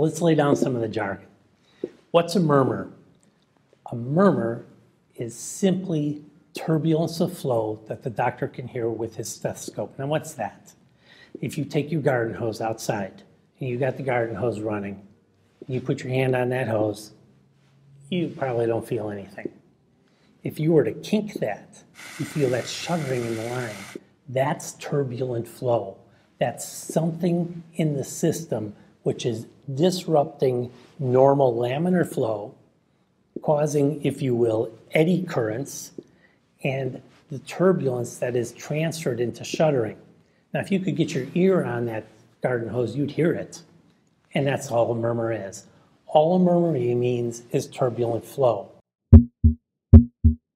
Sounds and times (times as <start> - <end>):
Speech: 0.0 - 1.3, 2.1 - 3.0, 3.8 - 10.8, 11.4 - 17.2, 18.1 - 19.6, 20.4 - 32.6, 33.4 - 36.0, 36.6 - 43.7, 44.3 - 48.8.